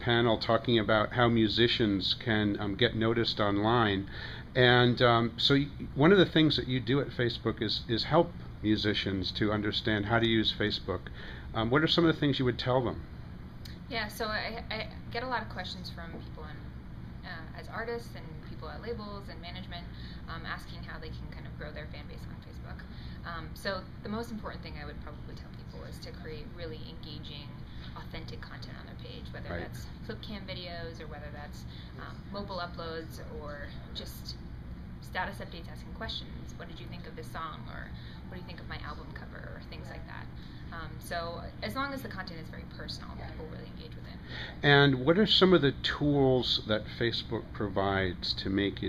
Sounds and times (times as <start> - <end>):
Speech: 17.3 - 34.4.